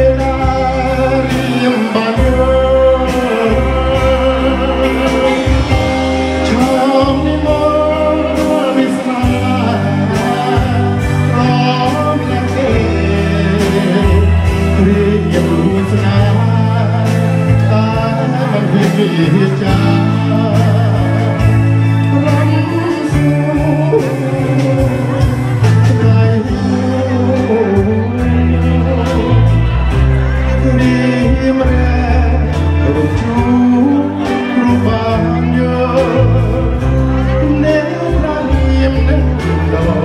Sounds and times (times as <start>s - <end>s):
Music: 0.0s - 40.0s
Singing: 0.0s - 40.0s.